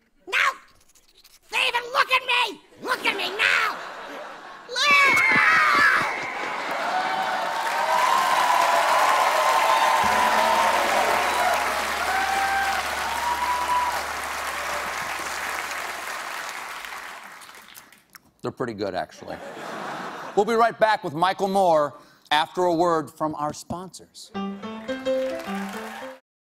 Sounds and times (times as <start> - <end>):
Applause: 5.2 - 18.1, 24.8 - 26.2.